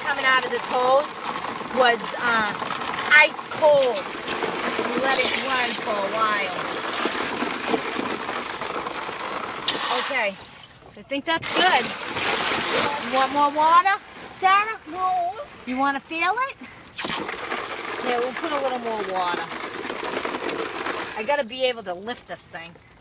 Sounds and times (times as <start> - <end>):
Speech: 1.8 - 4.1, 4.9 - 6.6, 11.0 - 11.9, 18.0 - 19.5, 21.2 - 22.8.